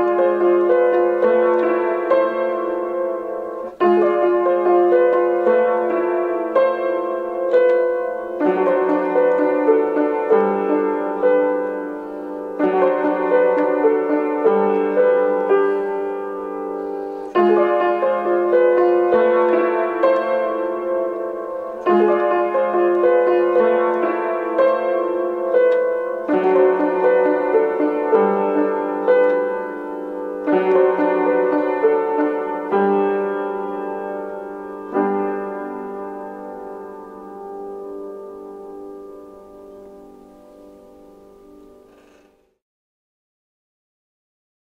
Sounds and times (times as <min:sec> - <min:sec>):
Music: 0:00.0 - 0:42.6.